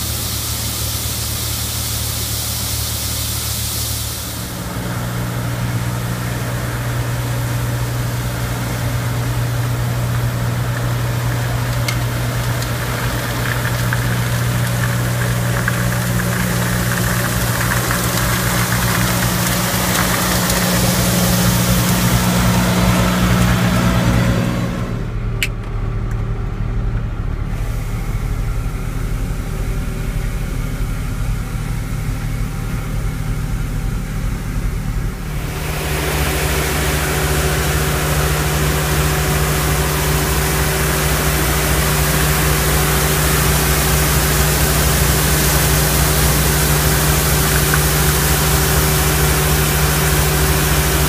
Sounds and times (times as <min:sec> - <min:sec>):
Truck: 0:00.0 - 0:51.0.